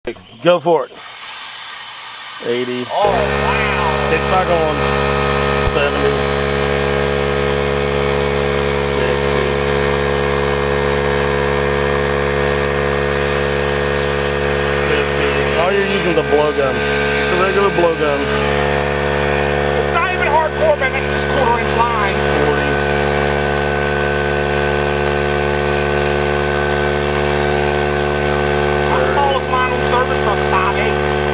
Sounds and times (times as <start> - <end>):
Electric toothbrush: 1.0 - 31.3.